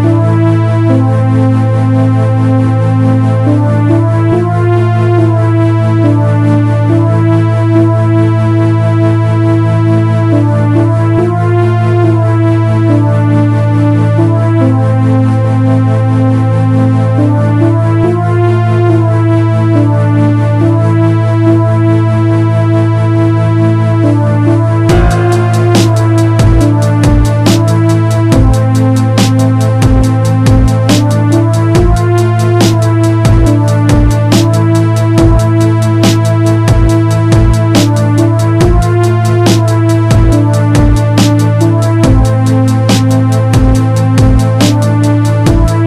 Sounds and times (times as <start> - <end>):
Dubstep: 24.8 - 45.8.